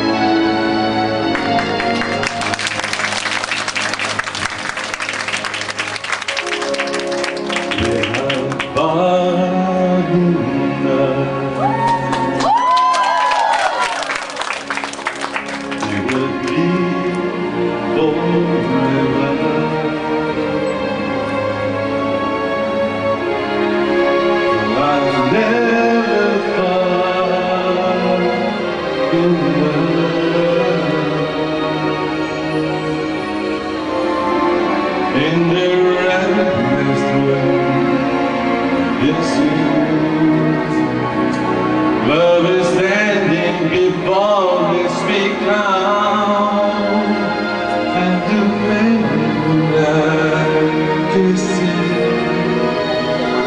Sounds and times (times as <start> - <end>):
Music: 0.0 - 53.4
Male singing: 7.8 - 12.1, 15.8 - 20.2, 24.5 - 31.7, 35.1 - 41.2, 42.0 - 53.4.